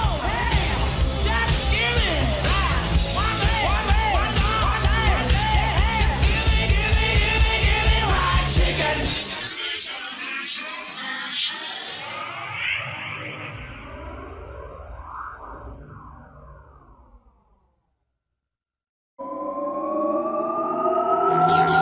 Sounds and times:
Music: 0.0s - 10.9s, 21.3s - 21.8s.

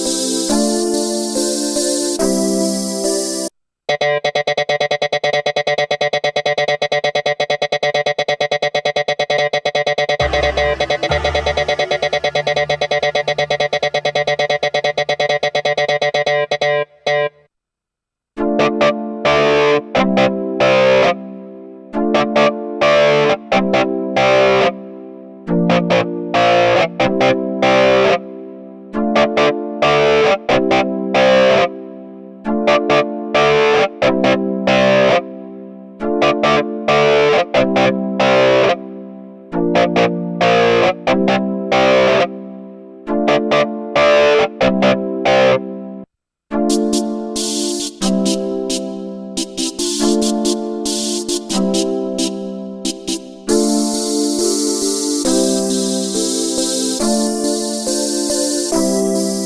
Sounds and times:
Synthesizer: 0.0s - 17.5s, 18.4s - 59.4s
Distortion: 10.1s - 21.1s, 39.8s - 42.3s, 43.1s - 56.4s.

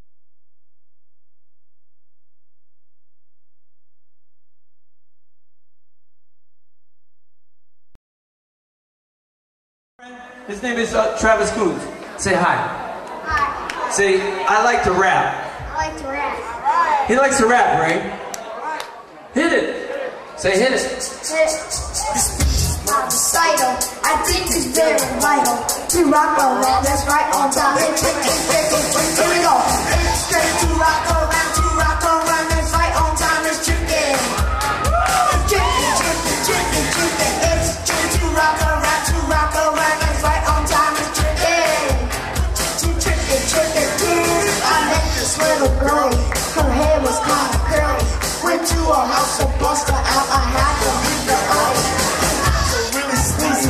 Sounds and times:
Dance music: 20.6s - 53.7s.

